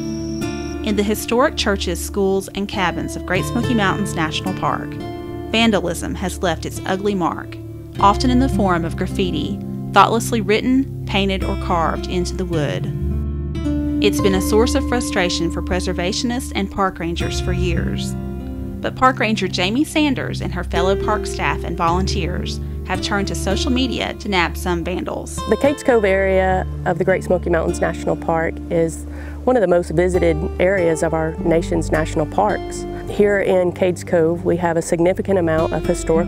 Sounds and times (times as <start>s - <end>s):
Music: 0.0s - 36.2s
Speech: 0.9s - 5.0s, 5.6s - 12.9s, 14.0s - 18.2s, 18.8s - 36.2s.